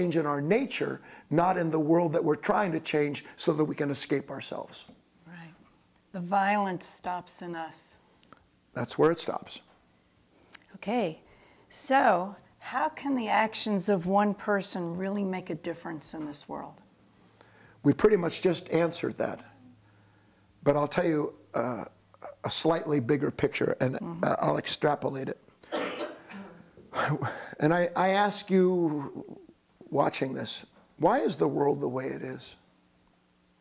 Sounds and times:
Conversation: 0.0s - 33.0s.

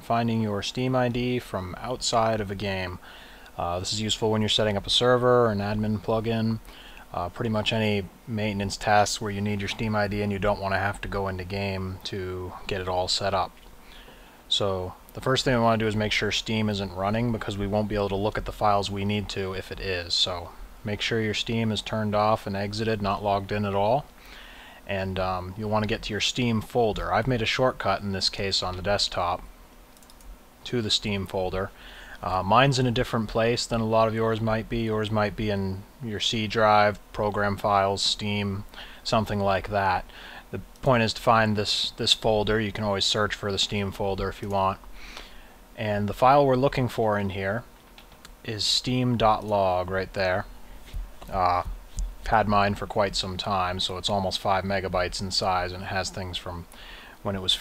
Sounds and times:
Speech: 0.0s - 3.0s, 3.6s - 13.5s, 14.5s - 24.1s, 24.9s - 29.5s, 30.6s - 44.8s, 45.8s - 47.7s, 48.4s - 50.5s, 51.2s - 57.6s.

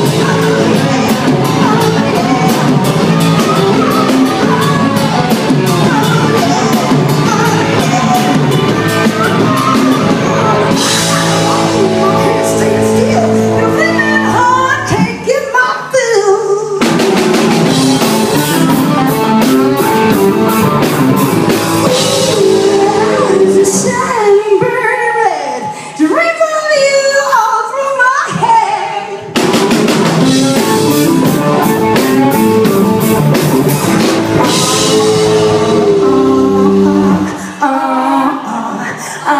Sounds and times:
Music: 0.0s - 39.3s.

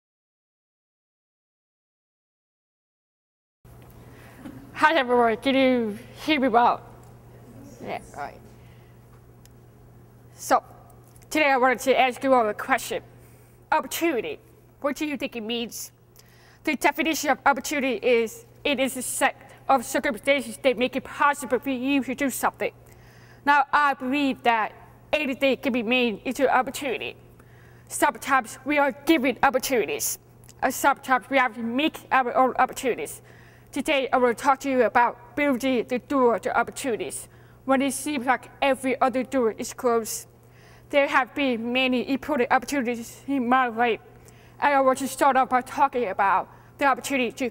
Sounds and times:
Speech: 4.8s - 6.9s, 7.5s - 8.5s, 10.4s - 13.0s, 13.7s - 16.0s, 16.7s - 22.8s, 23.5s - 27.2s, 27.9s - 40.3s, 40.9s - 47.5s.

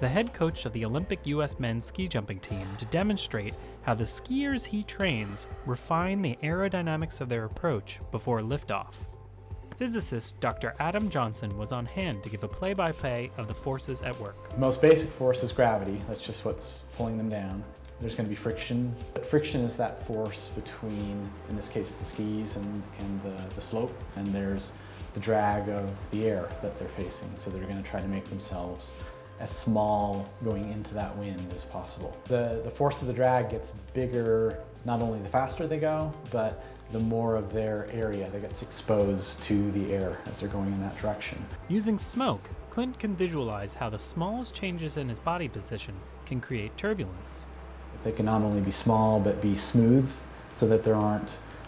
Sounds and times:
Speech: 0.0s - 9.0s, 9.8s - 51.5s
Music: 0.0s - 51.6s.

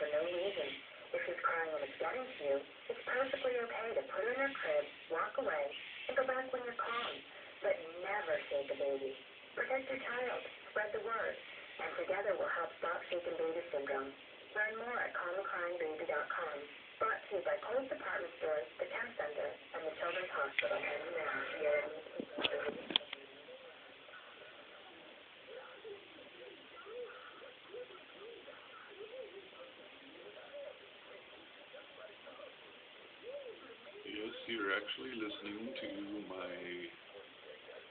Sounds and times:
Speech: 0.0s - 22.8s, 34.0s - 37.0s
Radio: 0.0s - 37.9s.

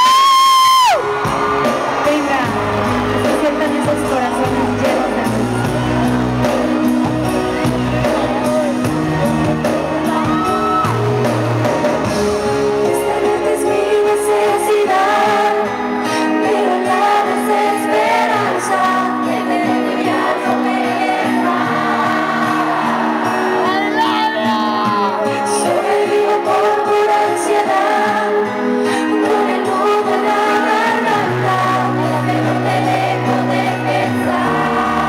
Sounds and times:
Music: 0.0s - 35.0s.

